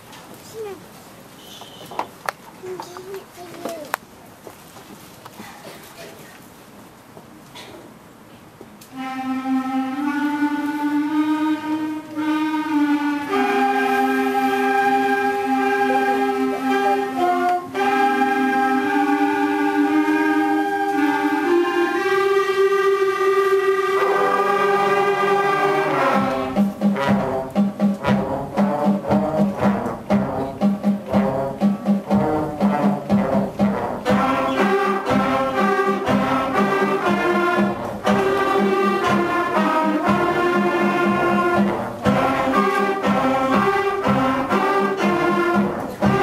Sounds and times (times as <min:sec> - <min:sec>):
Music: 0:08.9 - 0:46.2.